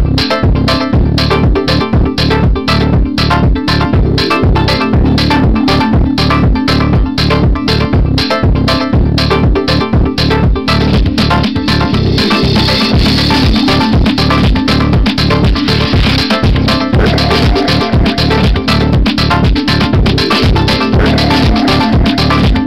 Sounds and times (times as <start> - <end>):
Music: 0.0 - 22.6.